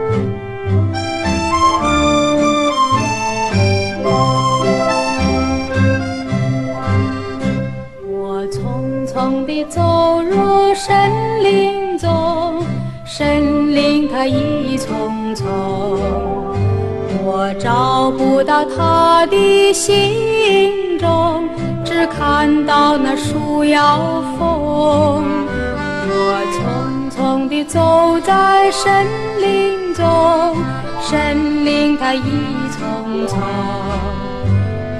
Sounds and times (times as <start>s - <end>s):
Music: 0.0s - 34.9s.